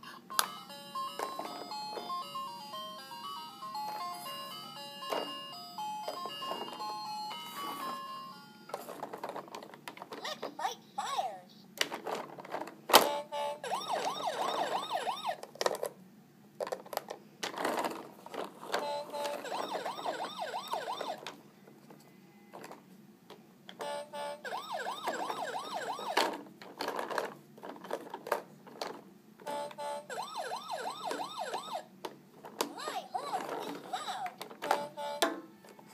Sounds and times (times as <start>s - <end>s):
Music: 0.2s - 8.8s, 18.8s - 21.1s, 34.7s - 35.9s
Speech: 10.2s - 11.7s, 32.7s - 34.4s.